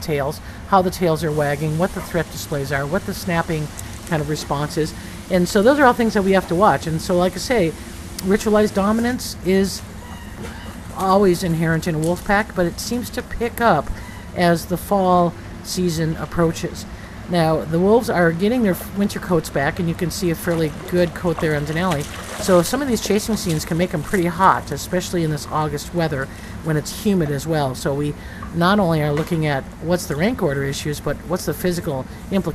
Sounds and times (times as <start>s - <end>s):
Speech: 0.0s - 9.8s, 11.0s - 32.5s.